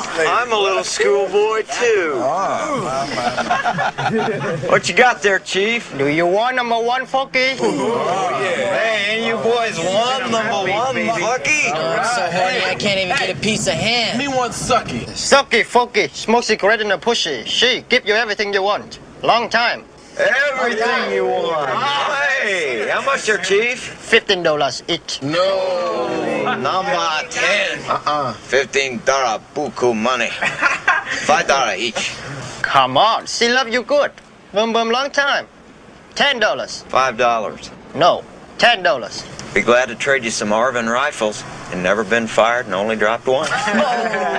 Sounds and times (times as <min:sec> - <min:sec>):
Outside, urban or manmade: 0:00.0 - 0:44.3.